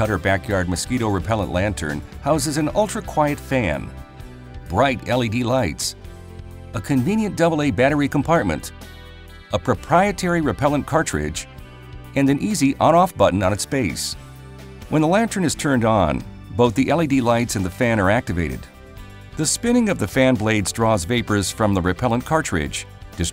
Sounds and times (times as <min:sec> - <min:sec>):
Speech: 0:00.0 - 0:03.9, 0:04.7 - 0:06.0, 0:06.8 - 0:08.7, 0:09.5 - 0:11.5, 0:12.2 - 0:14.2, 0:14.9 - 0:18.7, 0:19.4 - 0:23.3
Music: 0:00.0 - 0:23.3.